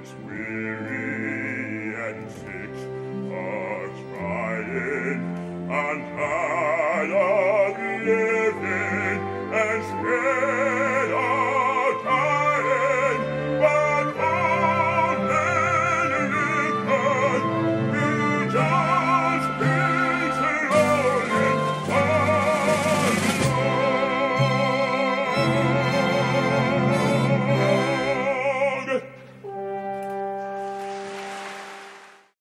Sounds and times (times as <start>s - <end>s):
Music: 0.0s - 32.4s.